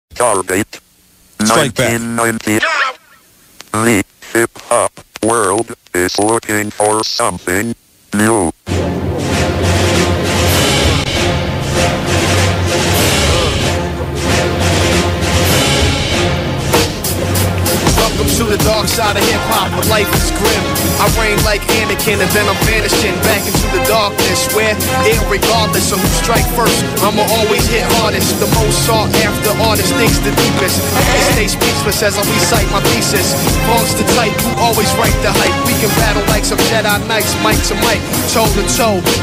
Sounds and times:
Speech: 0.1 - 0.8, 1.4 - 3.0, 3.7 - 8.6
Music: 8.7 - 39.2.

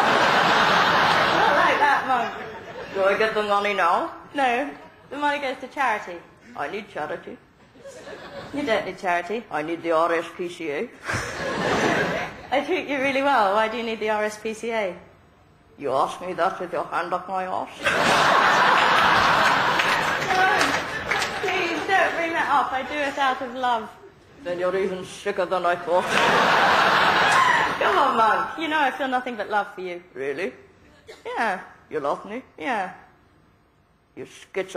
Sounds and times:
Speech: 21.4 - 26.2, 31.2 - 33.1, 34.2 - 34.7.

